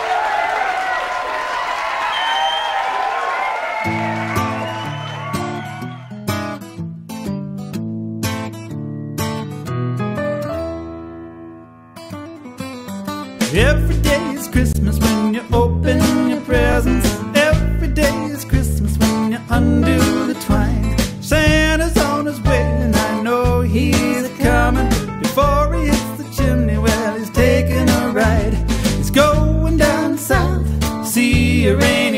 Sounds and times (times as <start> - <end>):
Reggae: 13.4 - 32.1.